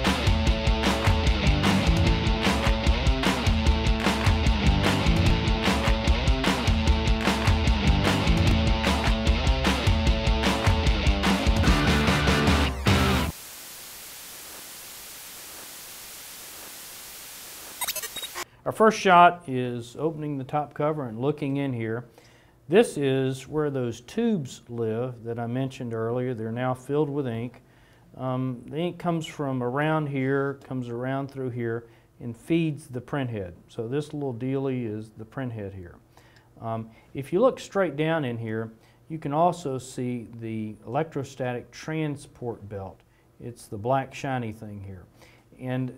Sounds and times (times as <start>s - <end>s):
Speech: 18.7s - 22.1s, 22.7s - 27.6s, 28.2s - 36.0s, 36.6s - 45.9s.